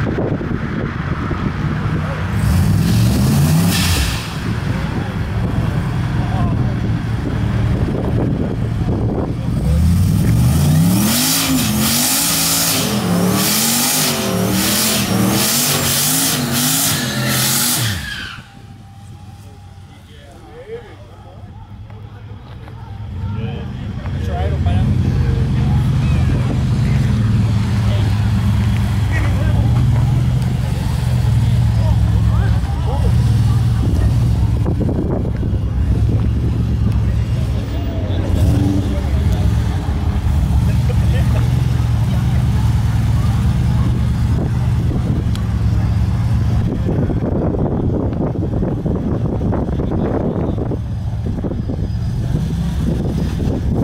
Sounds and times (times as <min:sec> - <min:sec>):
Truck: 0:00.0 - 0:53.8
Speech: 0:04.7 - 0:07.0, 0:19.1 - 0:28.4, 0:29.1 - 0:36.1, 0:36.8 - 0:40.0, 0:40.7 - 0:44.8.